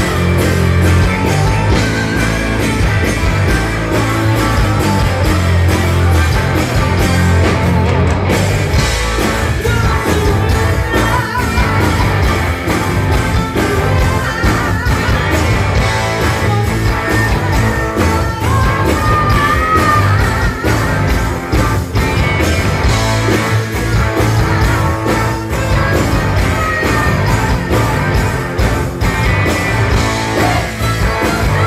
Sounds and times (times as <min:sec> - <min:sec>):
Rock and roll: 0:00.0 - 0:31.6.